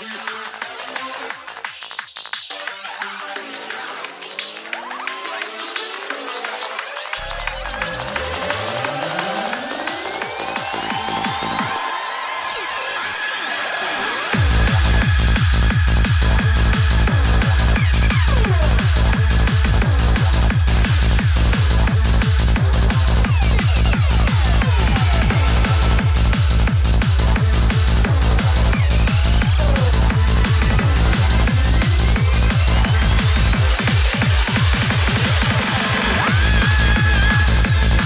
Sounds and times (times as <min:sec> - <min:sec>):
Disco: 0:00.0 - 0:38.0.